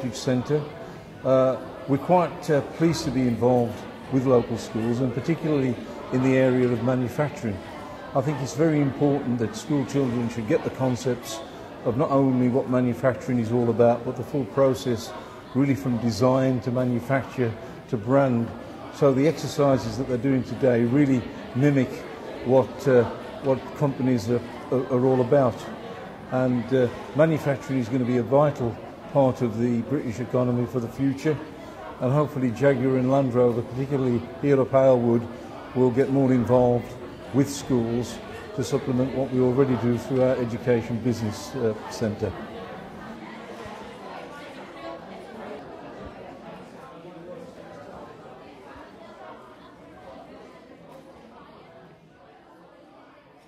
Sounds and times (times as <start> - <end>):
Chatter: 0.0 - 53.4.